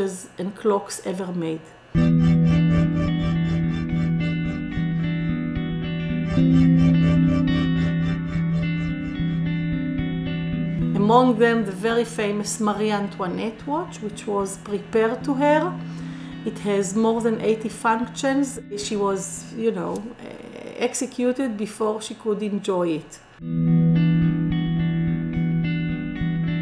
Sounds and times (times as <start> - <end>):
Speech: 0.0 - 1.8, 10.9 - 15.8, 16.5 - 23.2
Music: 2.0 - 20.1, 23.4 - 26.6.